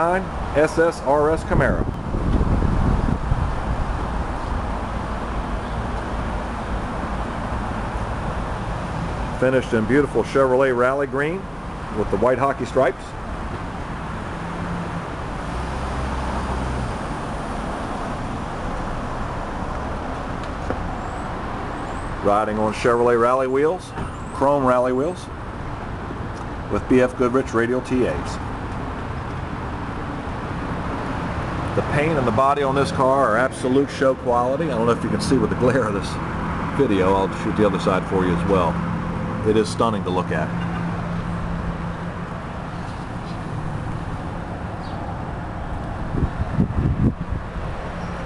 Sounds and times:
Speech: 0:00.0 - 0:01.9, 0:09.4 - 0:13.2, 0:22.2 - 0:25.3, 0:26.7 - 0:28.4, 0:31.8 - 0:36.2, 0:36.8 - 0:38.8, 0:39.4 - 0:40.6
Car: 0:00.0 - 0:48.2.

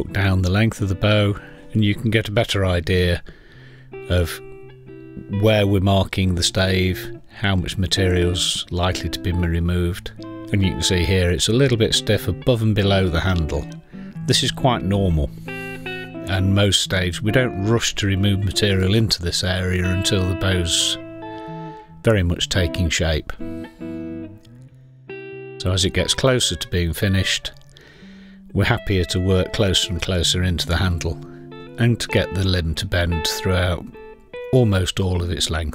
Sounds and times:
Speech: 0:00.0 - 0:03.2, 0:04.1 - 0:04.4, 0:05.3 - 0:15.3, 0:16.3 - 0:21.0, 0:22.0 - 0:23.4, 0:25.6 - 0:27.6, 0:28.5 - 0:31.2, 0:31.8 - 0:35.7
Music: 0:00.0 - 0:35.7.

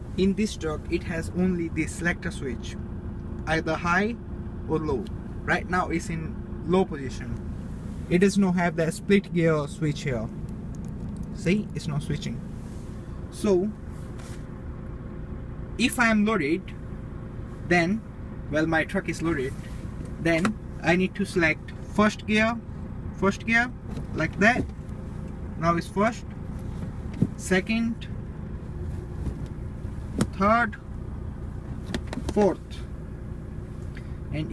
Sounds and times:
Vehicle: 0:00.0 - 0:34.5
Speech: 0:00.2 - 0:02.8, 0:03.5 - 0:07.4, 0:08.1 - 0:10.3, 0:11.4 - 0:12.4, 0:13.3 - 0:13.8, 0:15.8 - 0:16.8, 0:17.7 - 0:22.6, 0:23.2 - 0:24.7, 0:25.6 - 0:26.3, 0:27.4 - 0:28.1, 0:30.3 - 0:30.8, 0:32.3 - 0:32.9, 0:34.3 - 0:34.5.

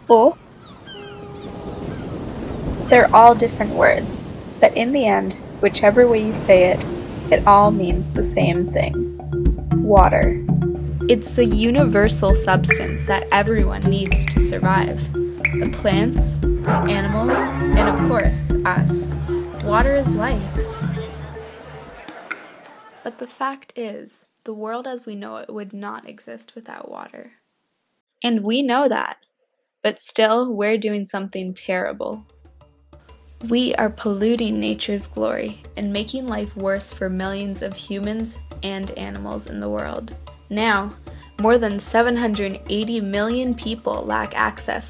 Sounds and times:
Speech: 0:00.1 - 0:00.4, 0:02.9 - 0:09.0, 0:09.8 - 0:10.4, 0:11.1 - 0:20.6, 0:23.1 - 0:27.4, 0:28.2 - 0:29.2, 0:29.9 - 0:32.3, 0:33.4 - 0:44.9
Music: 0:06.1 - 0:22.1, 0:31.7 - 0:44.9.

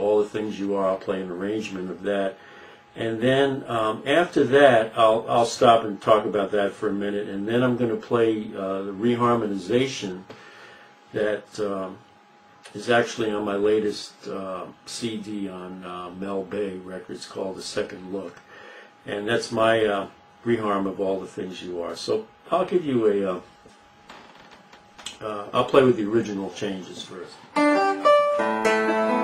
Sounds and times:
Speech: 0:00.0 - 0:02.4, 0:03.0 - 0:10.3, 0:11.1 - 0:12.0, 0:12.7 - 0:18.4, 0:19.1 - 0:23.5, 0:25.1 - 0:27.5.

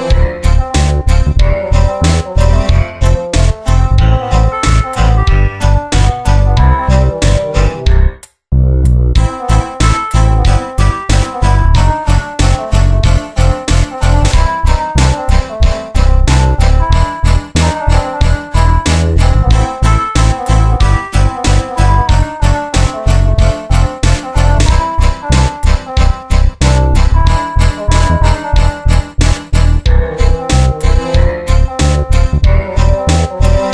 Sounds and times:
Music: 0:00.0 - 0:33.7.

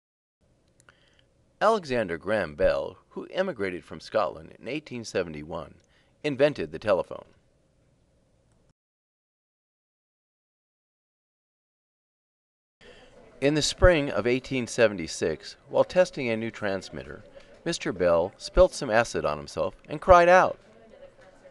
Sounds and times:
Speech: 0:01.6 - 0:07.4, 0:12.8 - 0:21.5.

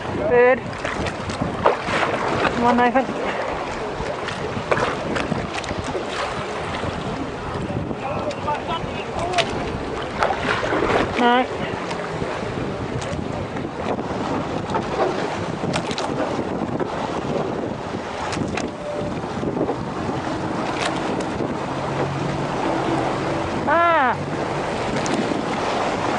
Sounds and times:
Sailboat, sailing ship: 0:00.0 - 0:26.1.

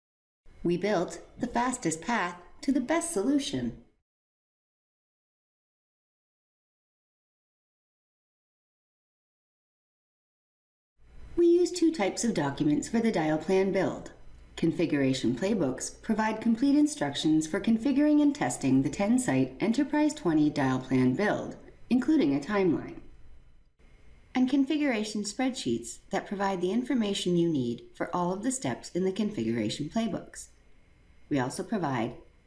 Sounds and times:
Speech: 0:00.6 - 0:03.9, 0:11.4 - 0:23.1, 0:24.4 - 0:30.6, 0:31.3 - 0:32.2.

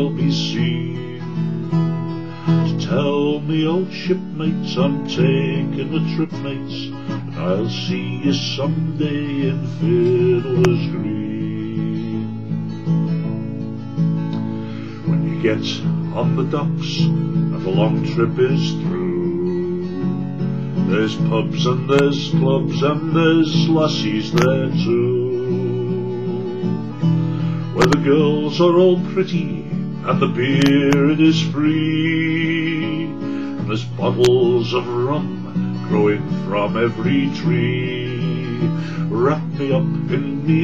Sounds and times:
Guitar: 0:00.0 - 0:40.6.

